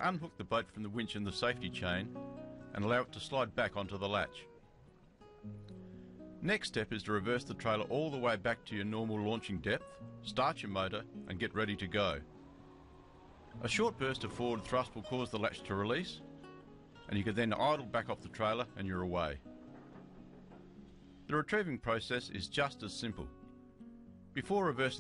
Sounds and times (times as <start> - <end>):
Speech: 0.0 - 2.1, 2.7 - 4.5, 6.4 - 12.2, 13.6 - 16.2, 17.1 - 19.5, 21.3 - 23.3, 24.4 - 25.0
Music: 0.0 - 25.0.